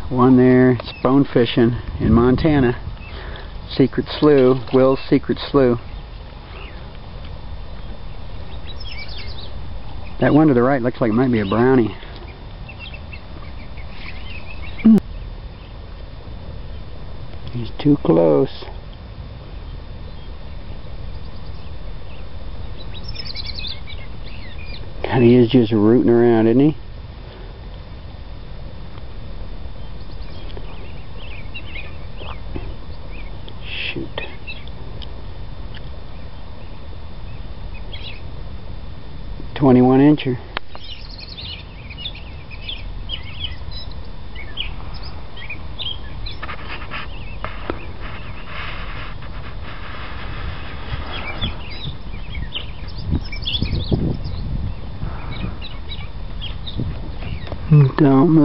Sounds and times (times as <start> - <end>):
Speech: 0.1 - 2.8, 3.7 - 5.8, 10.2 - 12.0, 17.5 - 18.8, 25.0 - 26.8, 33.6 - 34.4, 39.6 - 40.5, 57.7 - 58.4.